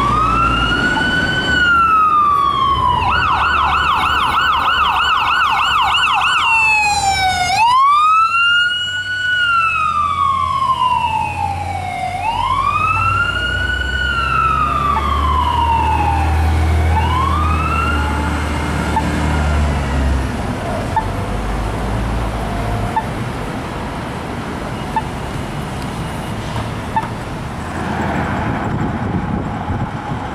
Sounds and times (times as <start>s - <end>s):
Police car (siren): 0.0s - 19.9s
Ambulance (siren): 0.0s - 20.0s.